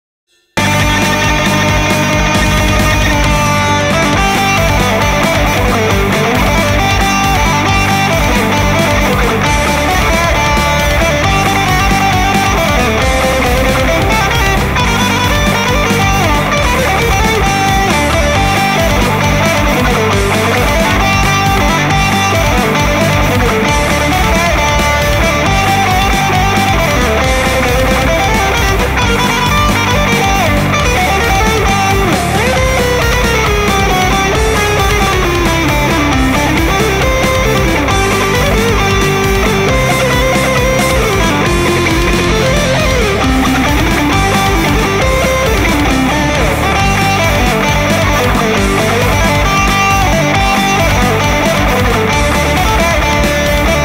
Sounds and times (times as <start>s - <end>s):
Music: 0.3s - 53.8s.